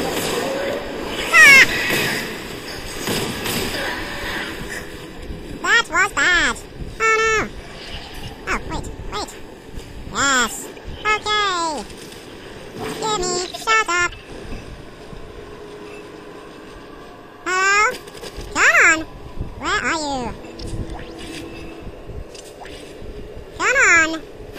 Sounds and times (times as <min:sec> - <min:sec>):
Speech: 0:05.6 - 0:07.5, 0:08.5 - 0:09.4, 0:10.1 - 0:11.9, 0:13.0 - 0:14.1, 0:17.4 - 0:18.0, 0:18.6 - 0:20.4, 0:23.6 - 0:24.2.